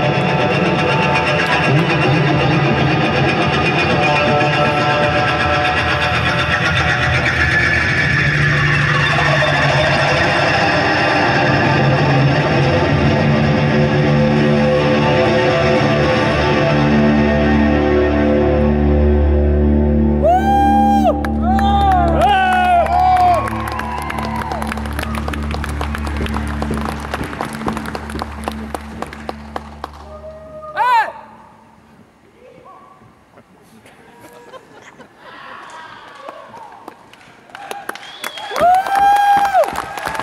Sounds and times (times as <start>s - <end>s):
Music: 0.0s - 31.9s.